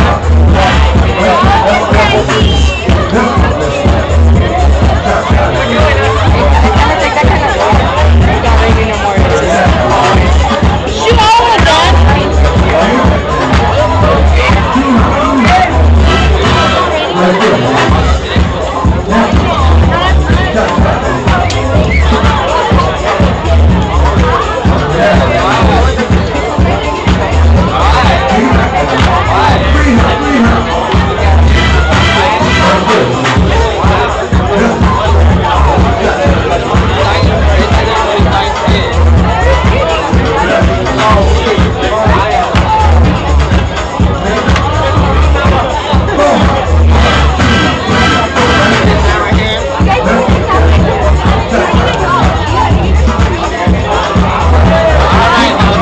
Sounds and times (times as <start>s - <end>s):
Music: 0.0s - 55.8s
Speech: 0.0s - 55.8s.